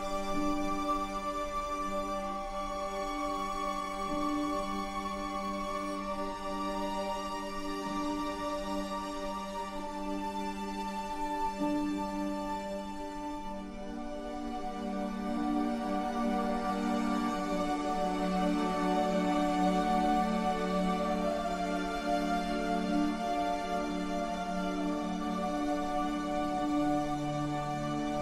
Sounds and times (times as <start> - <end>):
Music: 0.0 - 28.2.